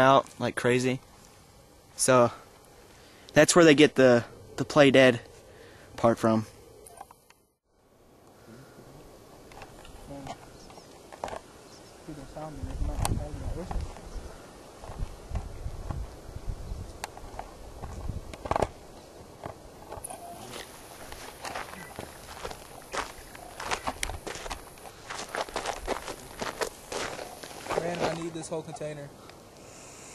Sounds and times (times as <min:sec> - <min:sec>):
Walk, footsteps: 0:20.5 - 0:28.2
Speech: 0:27.8 - 0:29.1
Snake: 0:29.1 - 0:30.1.